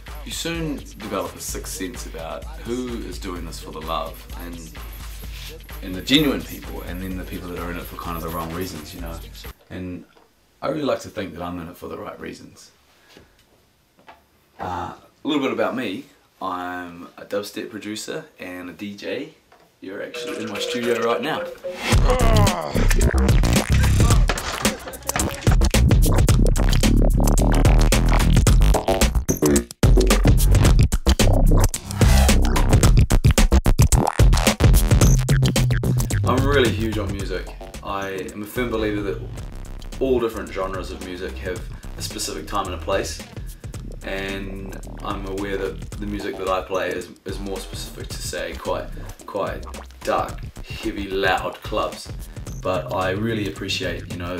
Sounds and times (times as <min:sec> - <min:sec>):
Scratching (performance technique): 0:20.0 - 0:54.3.